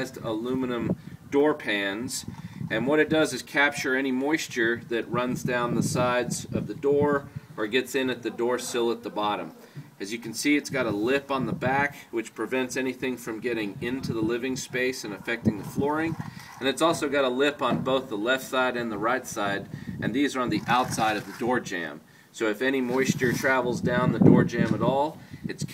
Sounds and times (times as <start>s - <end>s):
Speech: 0.0s - 25.7s.